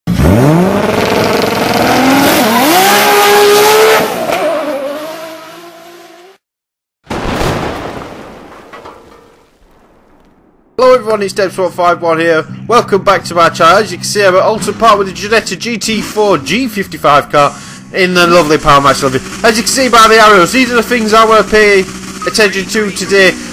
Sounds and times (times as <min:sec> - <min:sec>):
Accelerating, revving, vroom: 0:00.1 - 0:06.4
Race car, auto racing: 0:00.1 - 0:06.4, 0:12.5 - 0:23.5.